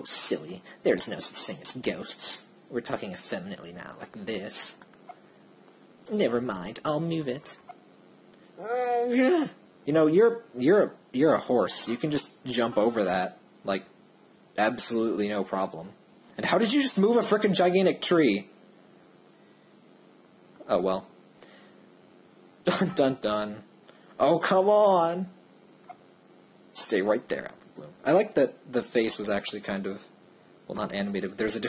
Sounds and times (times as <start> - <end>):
Speech: 0.0 - 4.8, 6.1 - 7.7, 8.6 - 13.9, 14.6 - 18.5, 20.6 - 21.2, 22.6 - 25.4, 26.8 - 31.6.